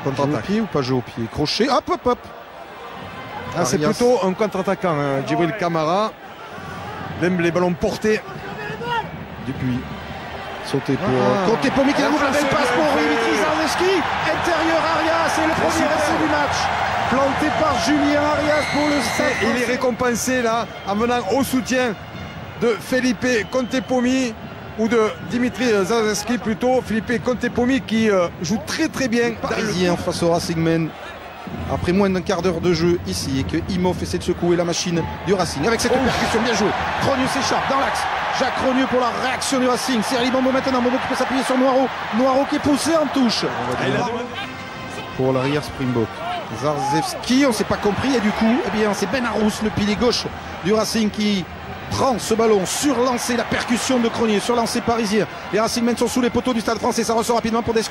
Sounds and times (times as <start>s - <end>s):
Speech: 3.5s - 6.2s, 10.7s - 22.0s, 22.6s - 30.9s, 31.7s - 44.3s, 45.2s - 57.9s.